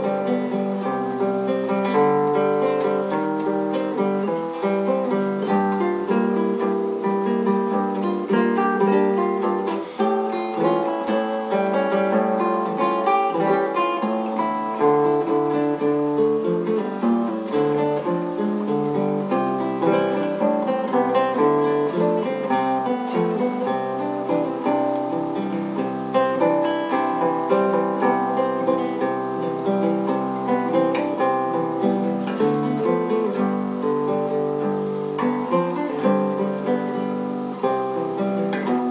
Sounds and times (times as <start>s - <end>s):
Acoustic guitar: 0.0s - 38.9s.